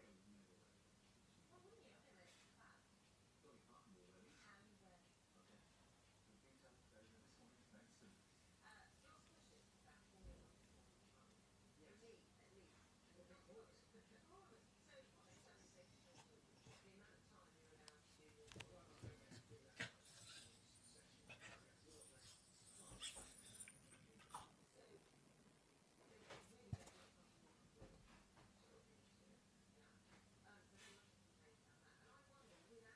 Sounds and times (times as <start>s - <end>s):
Domestic animals, pets: 19.3s - 24.6s.